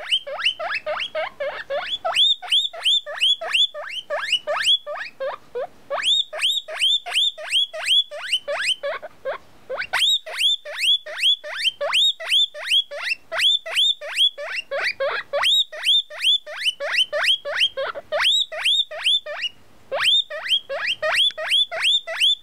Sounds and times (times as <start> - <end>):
Domestic animals, pets: 0.0 - 22.4
Pig: 0.0 - 22.4.